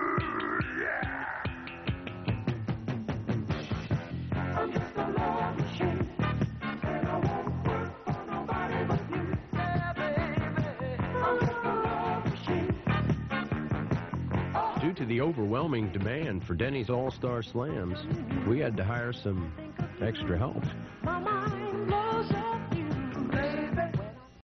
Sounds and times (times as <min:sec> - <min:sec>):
Music: 0:00.0 - 0:24.4
Speech: 0:14.8 - 0:20.8.